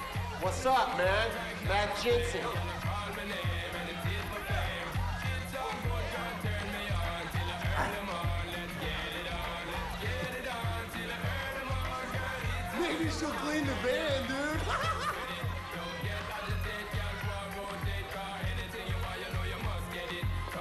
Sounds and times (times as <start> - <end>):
Music: 0.0 - 20.6
Speech: 0.4 - 2.7, 12.7 - 14.8.